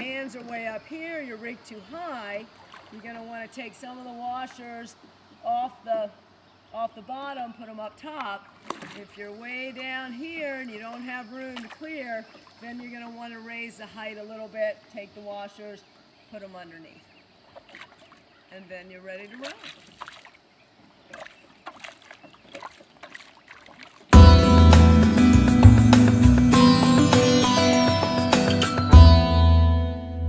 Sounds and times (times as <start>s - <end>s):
Speech: 0.0s - 17.1s, 18.5s - 19.6s
Rowboat, canoe, kayak: 0.0s - 24.4s
Music: 24.2s - 30.2s.